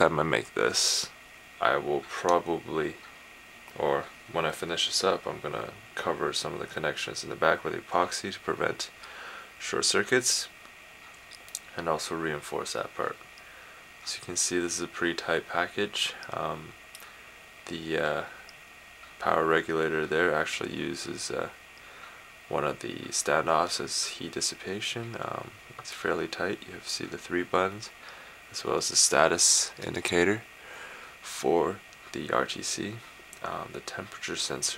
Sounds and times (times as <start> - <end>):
Speech: 0.0 - 3.1, 3.7 - 9.0, 9.6 - 10.5, 11.6 - 13.2, 14.0 - 16.8, 17.6 - 18.4, 19.2 - 21.6, 22.5 - 30.5, 31.2 - 34.7.